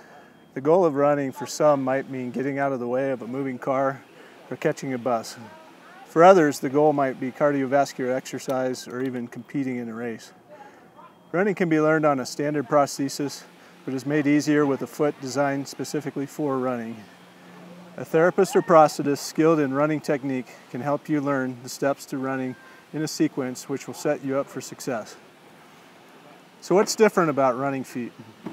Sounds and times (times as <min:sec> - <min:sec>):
Outside, rural or natural: 0:00.0 - 0:28.5
Speech: 0:00.6 - 0:10.4, 0:11.1 - 0:17.1, 0:18.0 - 0:25.2, 0:26.6 - 0:28.2.